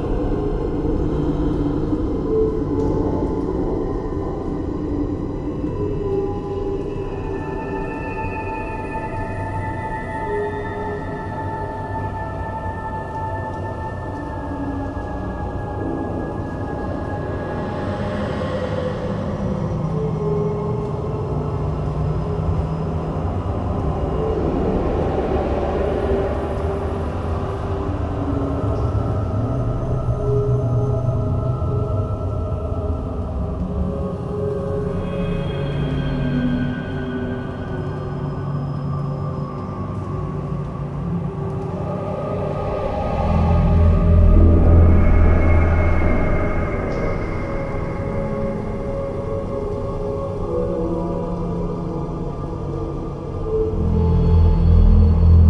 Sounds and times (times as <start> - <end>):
Scary music: 0.0 - 55.4.